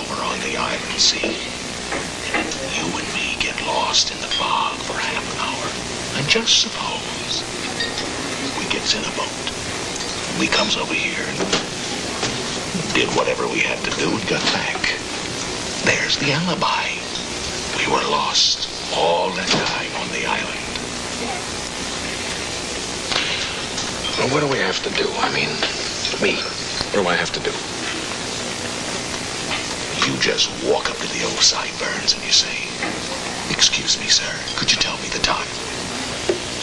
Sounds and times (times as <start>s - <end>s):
White noise: 0.0s - 36.6s.